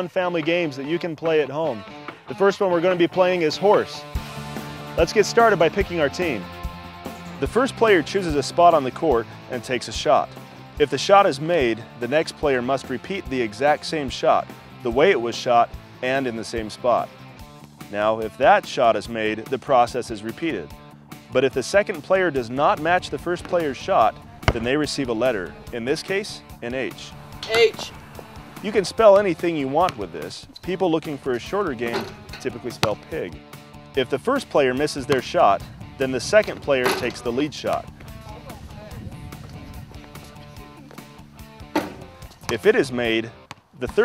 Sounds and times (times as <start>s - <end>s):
Speech: 0.0s - 4.1s, 5.0s - 6.4s, 7.4s - 17.1s, 17.9s - 20.7s, 21.4s - 28.0s, 28.6s - 33.4s, 34.0s - 39.2s, 42.5s - 44.0s
Music: 0.0s - 44.0s.